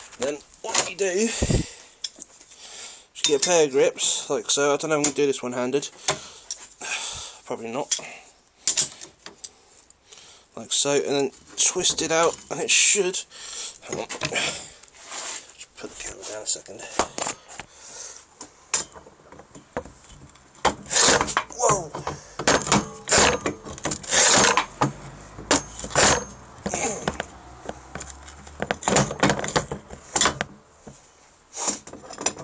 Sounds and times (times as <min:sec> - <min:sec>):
Speech: 0:00.2 - 0:01.4, 0:03.2 - 0:05.9, 0:07.5 - 0:08.2, 0:10.6 - 0:14.3, 0:15.6 - 0:17.0, 0:21.6 - 0:22.0.